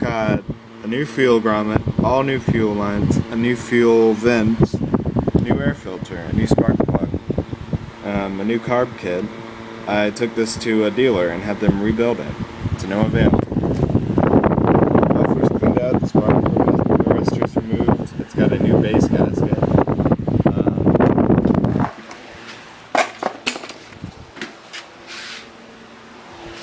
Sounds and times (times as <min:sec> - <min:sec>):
Speech: 0:00.0 - 0:04.8, 0:05.4 - 0:07.2, 0:08.0 - 0:09.3, 0:09.9 - 0:13.4, 0:15.1 - 0:19.7.